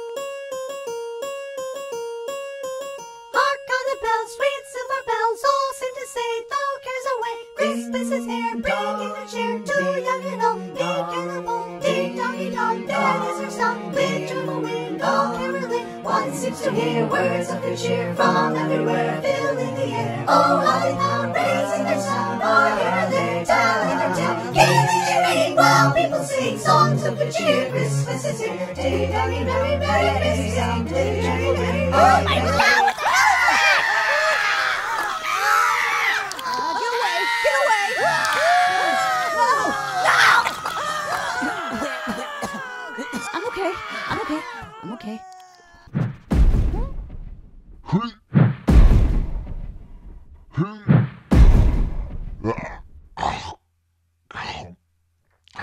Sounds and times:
Music for children: 0:00.0 - 0:32.6
Choir: 0:03.4 - 0:35.6, 0:38.0 - 0:44.6.

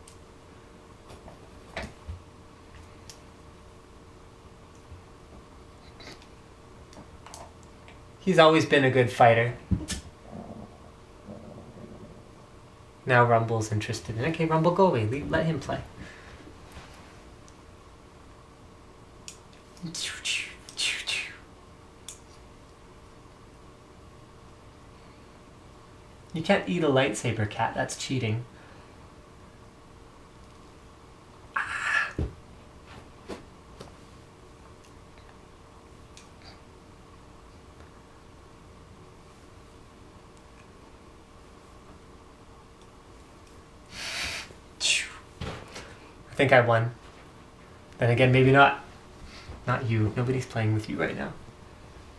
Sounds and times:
Speech: 0:08.2 - 0:09.6, 0:13.1 - 0:15.9, 0:26.3 - 0:28.5, 0:46.3 - 0:47.0, 0:48.0 - 0:48.9, 0:49.7 - 0:51.4.

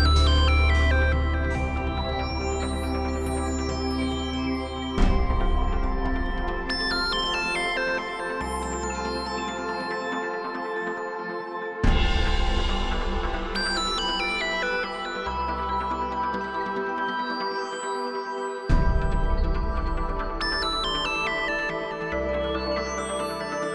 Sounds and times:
Music: 0:00.0 - 0:23.7.

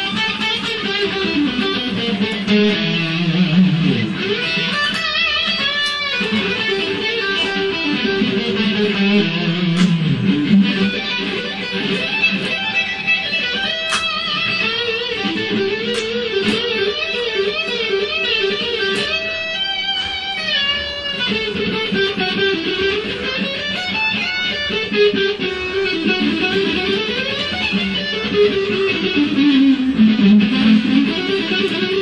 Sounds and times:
Electric guitar: 0:00.0 - 0:32.0.

